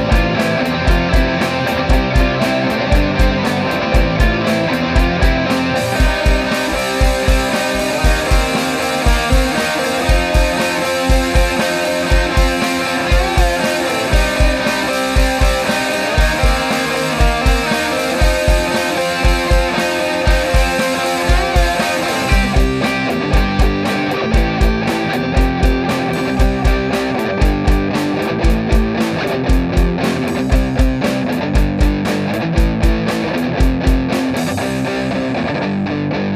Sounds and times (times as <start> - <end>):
Rock and roll: 0.0 - 36.3.